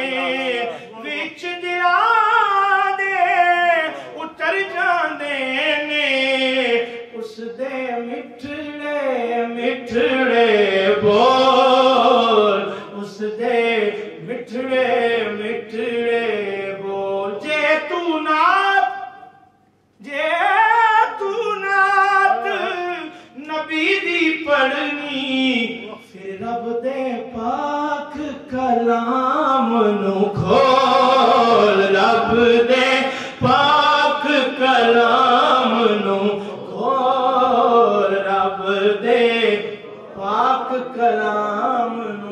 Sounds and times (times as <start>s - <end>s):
Chant: 0.0s - 19.4s, 20.0s - 42.3s.